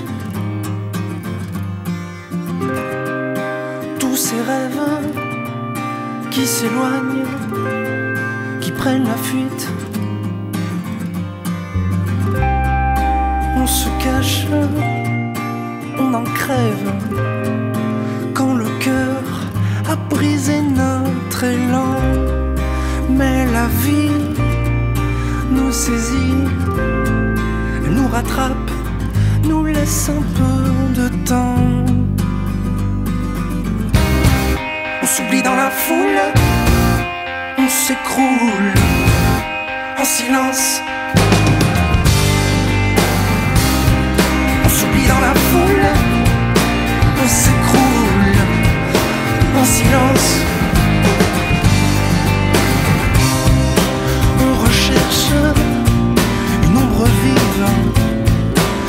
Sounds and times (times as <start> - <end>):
Music: 0.0 - 58.8.